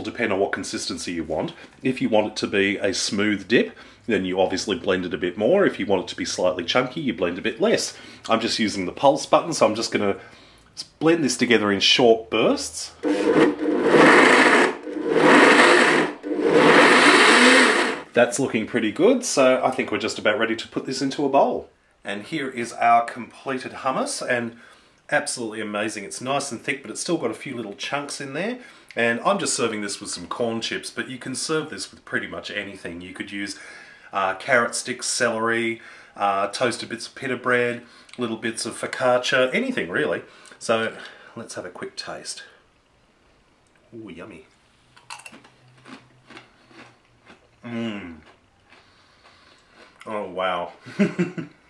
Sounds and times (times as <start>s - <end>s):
Speech: 0.0s - 10.2s, 10.8s - 13.0s, 18.2s - 42.6s, 43.9s - 44.5s, 47.6s - 48.2s, 50.0s - 50.8s
Inside, small room: 0.0s - 51.7s.